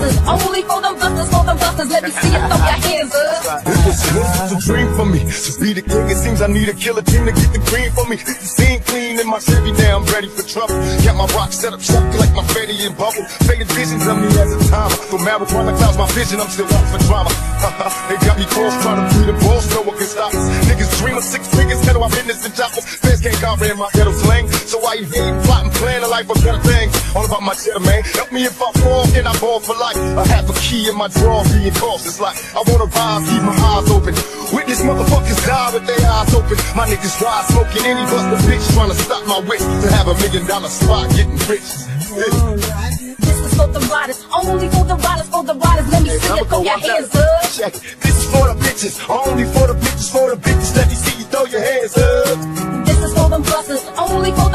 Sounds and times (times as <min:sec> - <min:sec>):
Hip hop music: 0:00.0 - 0:54.5
Rapping: 0:00.0 - 0:54.5.